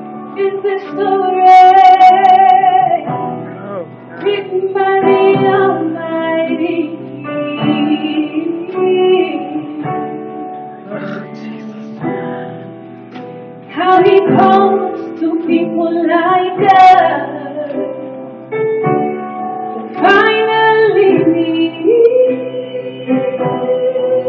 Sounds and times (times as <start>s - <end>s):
Music: 0.0s - 24.2s
Female singing: 0.4s - 3.1s, 4.2s - 12.6s, 13.7s - 17.9s, 20.0s - 24.2s.